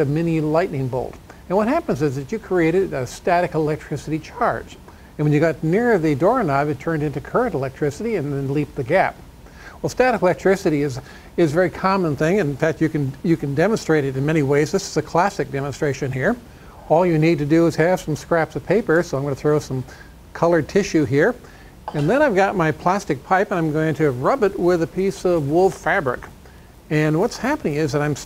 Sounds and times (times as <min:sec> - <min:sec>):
Speech: 0:00.0 - 0:09.2, 0:09.8 - 0:28.2.